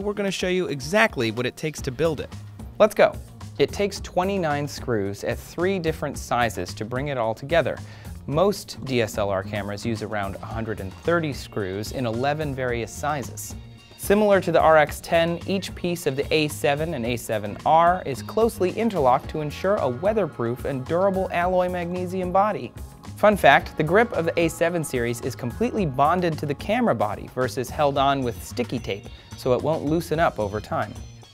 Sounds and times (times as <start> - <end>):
Speech: 0.0 - 31.0
Music: 0.0 - 31.3.